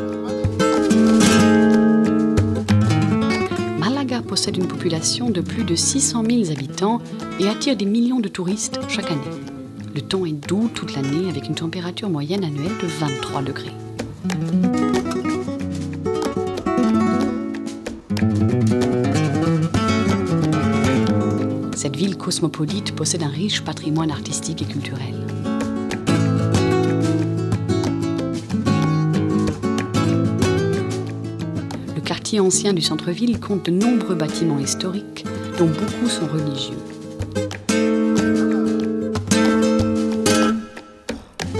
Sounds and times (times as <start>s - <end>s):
Music: 0.0s - 41.5s
Speech: 3.8s - 13.8s, 21.8s - 25.2s, 32.0s - 36.9s.